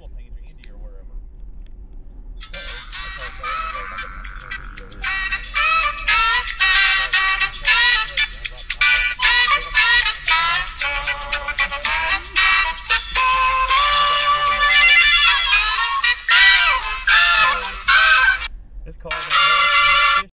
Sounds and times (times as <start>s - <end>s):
Speech: 0.0s - 1.2s, 2.4s - 10.6s, 13.2s - 14.9s, 17.1s - 18.2s, 18.9s - 20.3s
Music: 2.4s - 18.5s, 19.1s - 20.3s.